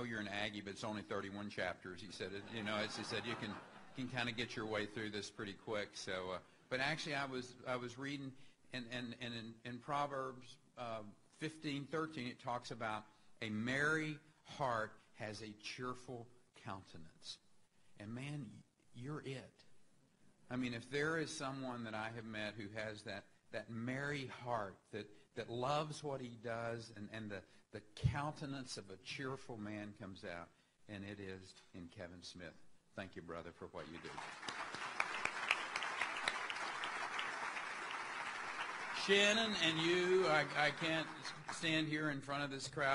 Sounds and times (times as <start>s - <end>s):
Male speech, man speaking: 0.0s - 17.4s, 18.0s - 19.7s, 20.5s - 34.2s, 39.0s - 42.9s
Narration, monologue: 0.0s - 42.9s.